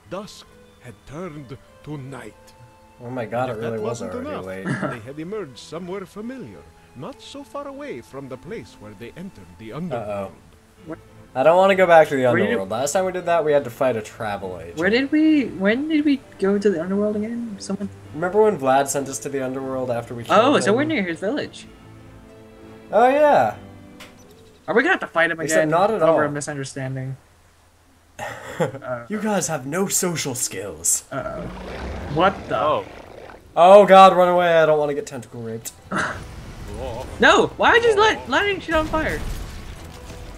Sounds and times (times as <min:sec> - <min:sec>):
Music: 0:00.0 - 0:40.3
Speech: 0:03.0 - 0:21.7, 0:28.8 - 0:31.5, 0:32.1 - 0:32.9, 0:33.6 - 0:35.7.